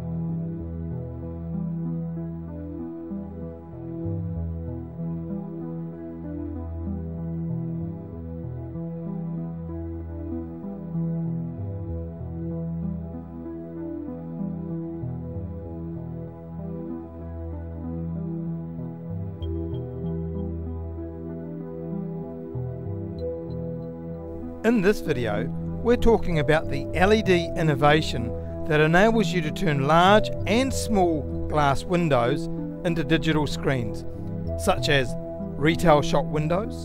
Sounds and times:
Music: 0.0s - 36.8s.

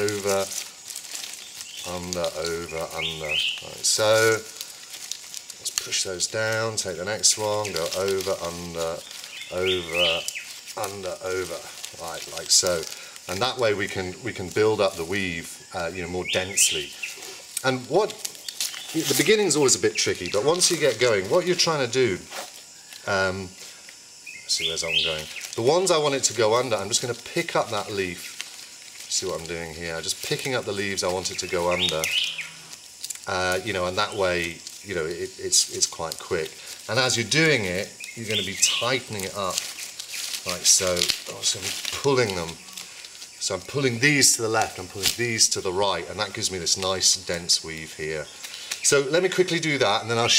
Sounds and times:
Speech: 0.0s - 0.6s, 1.8s - 4.6s, 5.6s - 17.0s, 17.6s - 18.2s, 18.9s - 22.3s, 23.0s - 23.6s, 24.5s - 28.3s, 29.1s - 32.2s, 33.2s - 39.7s, 40.4s - 42.6s, 43.4s - 50.3s.

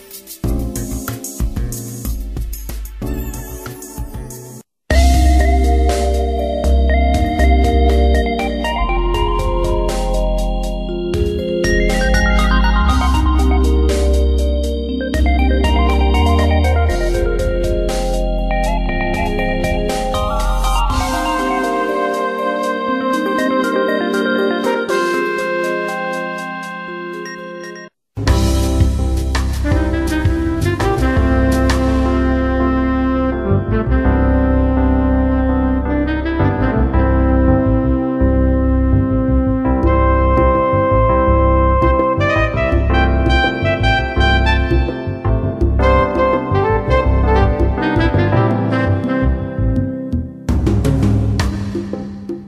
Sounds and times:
Jazz: 0.0s - 27.4s, 28.2s - 52.4s.

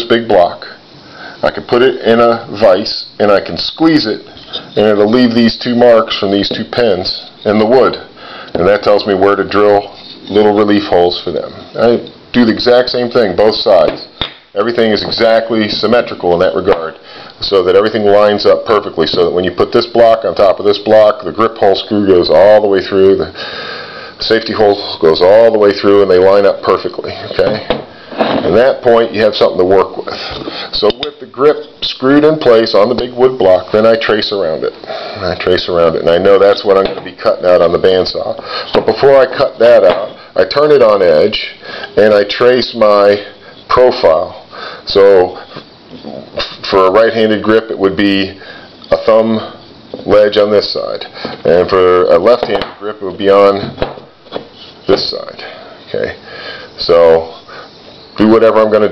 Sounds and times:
Speech: 0.0s - 0.8s, 1.4s - 23.4s, 24.2s - 53.8s, 54.8s - 56.2s, 56.8s - 57.4s, 58.2s - 58.9s
Inside, small room: 0.0s - 58.9s.

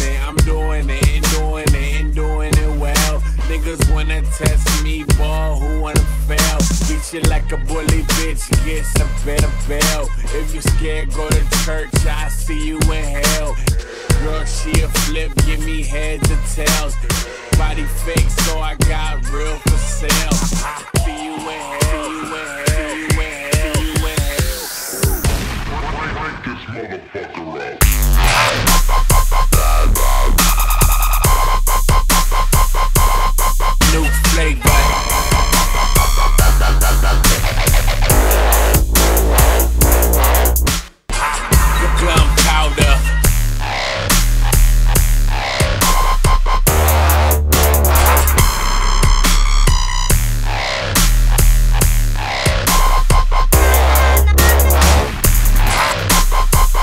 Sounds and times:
Music: 0.0s - 26.0s, 27.8s - 56.8s.

